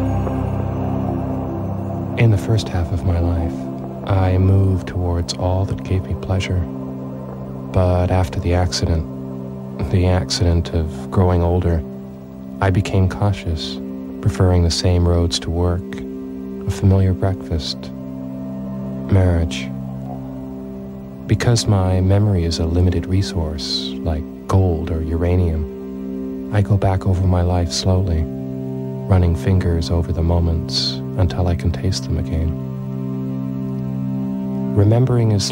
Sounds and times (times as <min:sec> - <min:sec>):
Music: 0:00.0 - 0:35.5
Speech: 0:02.2 - 0:06.7, 0:07.7 - 0:09.1, 0:09.8 - 0:11.9, 0:12.6 - 0:18.0, 0:19.0 - 0:19.8, 0:21.3 - 0:25.7, 0:26.5 - 0:28.3, 0:29.0 - 0:32.6, 0:34.7 - 0:35.5.